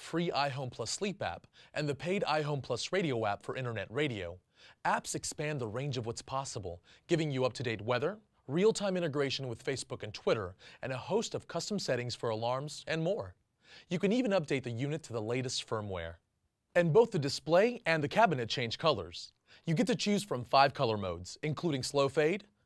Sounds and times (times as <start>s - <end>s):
Speech: 0.0s - 16.2s, 16.8s - 22.6s.